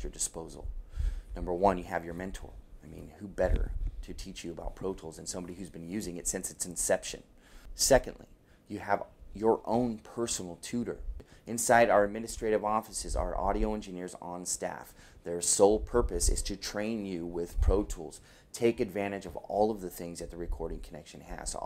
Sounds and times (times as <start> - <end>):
Speech: 0.0 - 21.6.